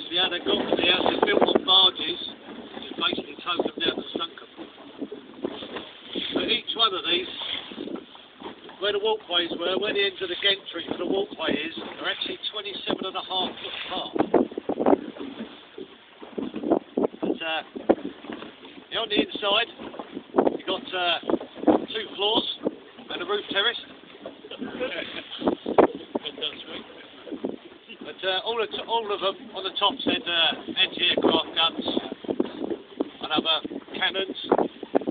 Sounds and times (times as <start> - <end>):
Speech: 0.1 - 4.4, 6.4 - 7.3, 8.8 - 14.2, 17.4 - 17.6, 18.9 - 19.7, 20.6 - 21.2, 21.9 - 23.8, 27.9 - 32.2, 33.2 - 34.5.